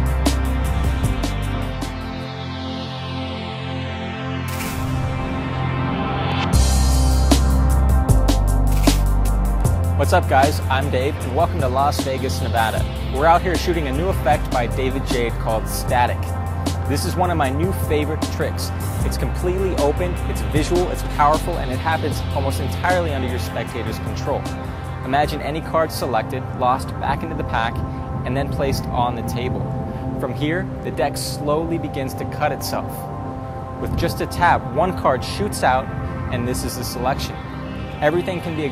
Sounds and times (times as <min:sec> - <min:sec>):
Music: 0:00.0 - 0:38.7
Speech: 0:10.0 - 0:16.3, 0:16.9 - 0:33.1, 0:33.8 - 0:37.4, 0:38.0 - 0:38.7.